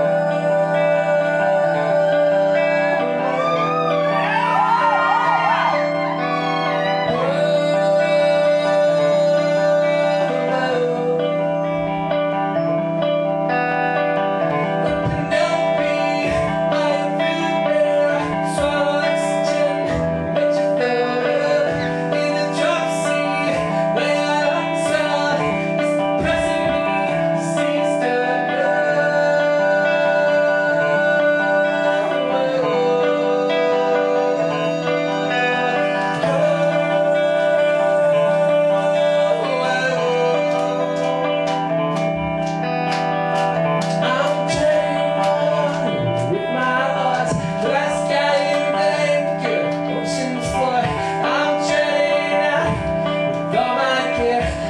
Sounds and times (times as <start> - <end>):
Music: 0.0 - 54.7.